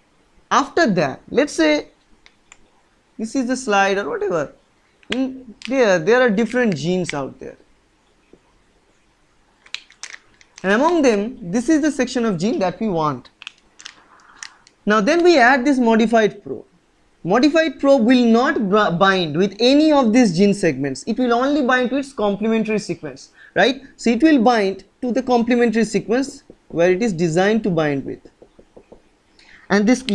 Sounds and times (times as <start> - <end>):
Speech: 0.5 - 2.0, 3.2 - 7.6, 10.6 - 13.3, 14.8 - 28.3, 29.7 - 30.1.